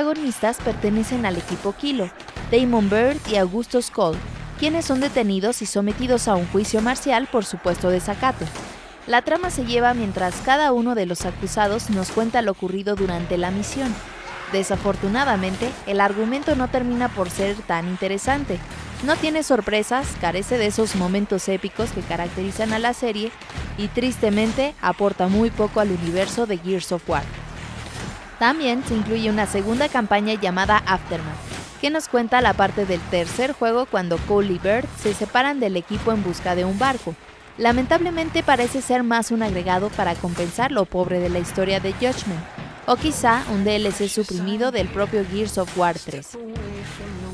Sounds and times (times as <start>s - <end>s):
Speech: 0.0s - 27.2s, 28.4s - 47.3s
Music: 0.0s - 47.3s.